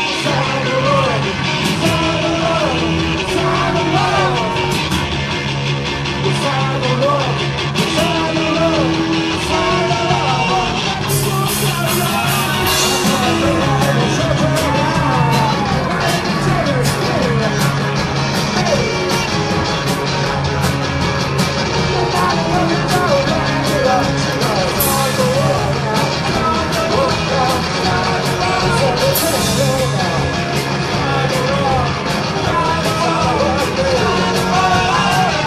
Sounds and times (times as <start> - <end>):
Singing: 0.0 - 4.9, 6.2 - 20.8, 21.7 - 35.4
Inside, public space: 0.0 - 35.4
Rock music: 0.0 - 35.4.